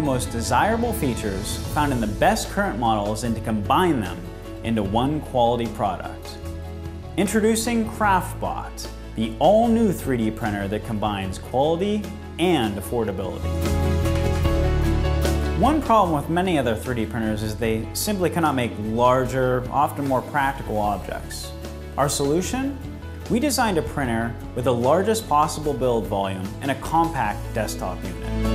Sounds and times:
Speech: 0.0s - 6.4s, 7.2s - 13.5s, 15.6s - 28.2s
Music: 0.0s - 28.5s.

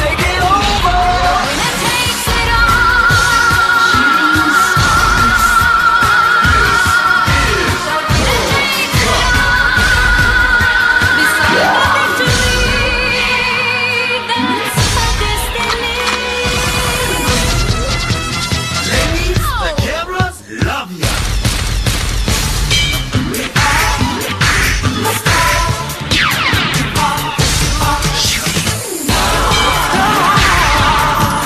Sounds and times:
Music: 0.0s - 31.4s.

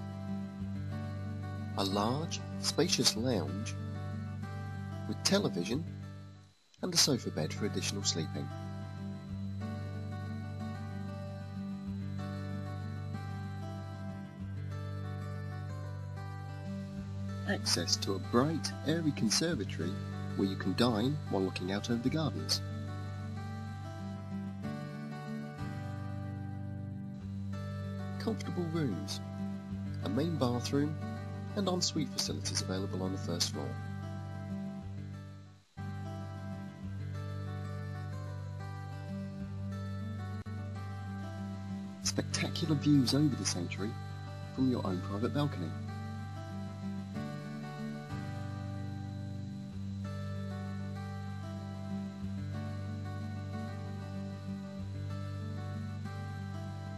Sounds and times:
Music: 0.0s - 56.9s
Speech: 1.8s - 3.7s, 5.1s - 5.9s, 6.8s - 8.5s, 17.5s - 22.6s, 28.2s - 29.2s, 30.0s - 31.0s, 31.6s - 33.8s, 42.1s - 43.9s, 44.6s - 45.8s.

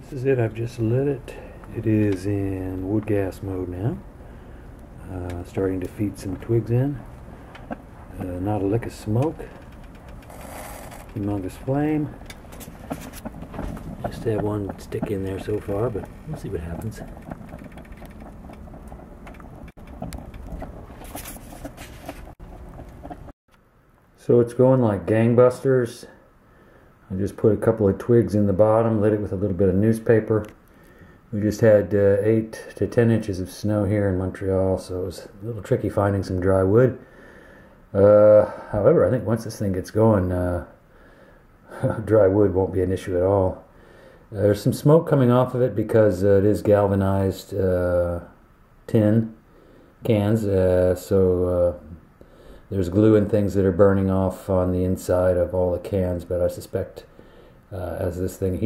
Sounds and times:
Speech: 0.0s - 4.0s, 5.0s - 7.1s, 8.1s - 9.6s, 11.2s - 12.2s, 14.0s - 17.2s, 24.2s - 26.2s, 27.1s - 30.6s, 31.3s - 37.0s, 38.0s - 40.8s, 41.7s - 43.7s, 44.3s - 49.4s, 50.0s - 52.0s, 52.7s - 57.1s, 57.7s - 58.6s.

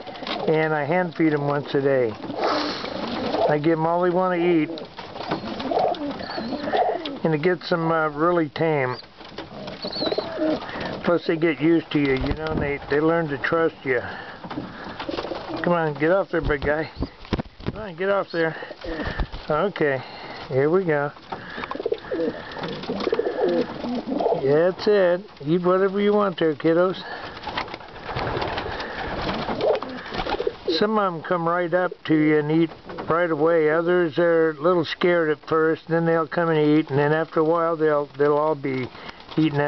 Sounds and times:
Speech: 0.5s - 2.2s, 3.5s - 4.8s, 7.2s - 9.0s, 11.0s - 14.2s, 15.6s - 17.0s, 17.8s - 18.6s, 19.5s - 21.2s, 24.4s - 27.1s, 30.7s - 39.6s
Pigeon, dove: 4.6s - 7.2s, 9.0s - 11.0s, 21.4s - 24.4s.

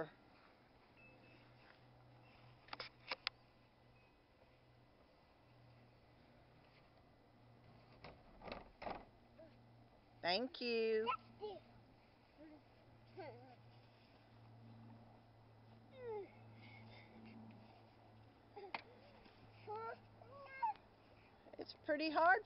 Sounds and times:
Child speech, kid speaking: 11.0s - 11.7s, 19.7s - 20.8s.

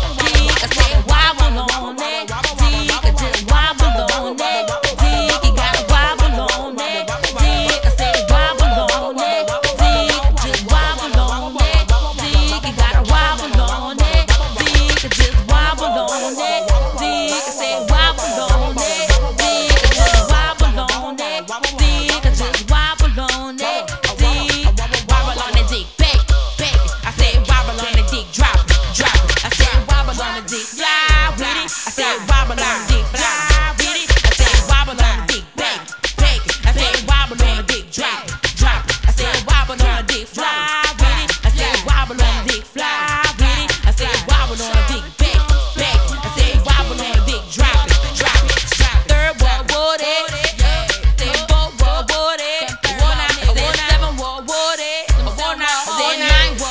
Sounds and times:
Hip hop music: 0.0s - 56.7s.

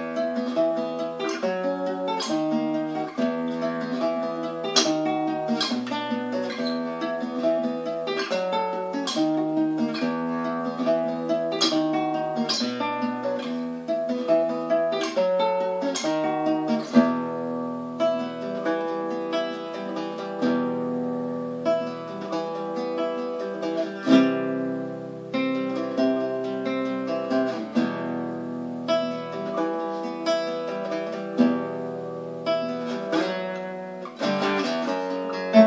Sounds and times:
Acoustic guitar: 0.0s - 35.6s
Strum: 0.0s - 35.6s.

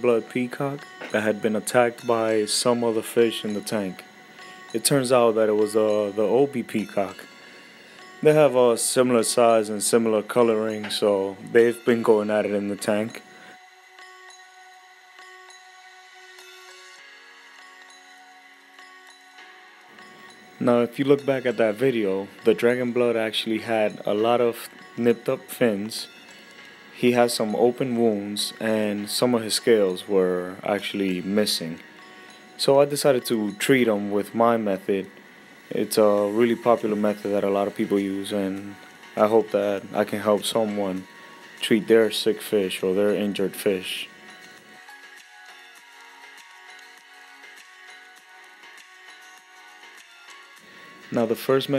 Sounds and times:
Speech: 0.0s - 4.0s, 4.8s - 7.2s, 8.2s - 13.2s, 20.6s - 26.1s, 27.0s - 31.8s, 32.6s - 35.1s, 35.7s - 41.0s, 41.6s - 44.1s, 51.1s - 51.7s.

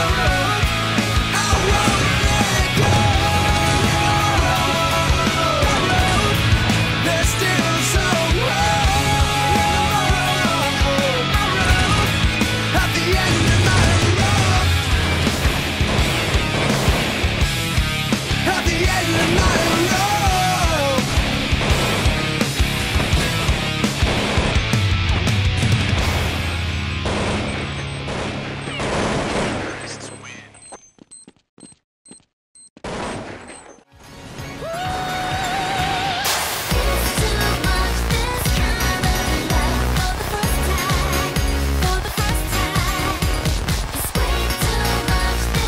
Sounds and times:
Music: 0.0s - 28.6s, 33.9s - 45.6s.

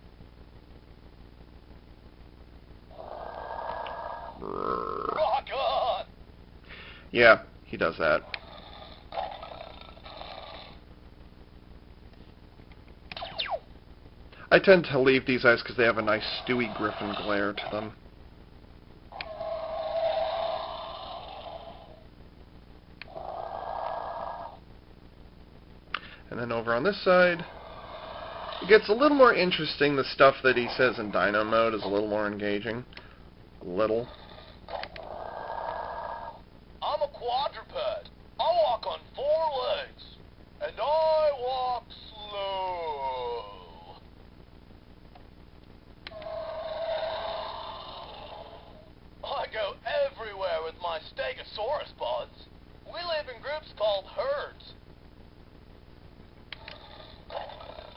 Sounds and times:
Inside, small room: 0.0s - 57.9s
Speech: 4.7s - 6.1s, 7.1s - 8.3s, 14.5s - 18.0s, 26.3s - 27.5s, 28.6s - 32.9s, 33.6s - 34.1s, 36.8s - 43.8s, 49.2s - 54.8s.

